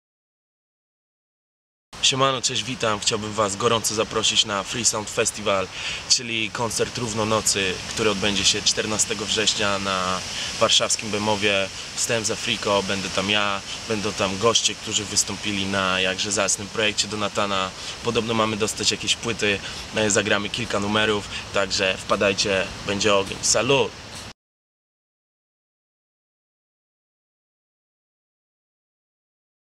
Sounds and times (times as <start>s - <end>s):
Speech: 2.0s - 24.0s.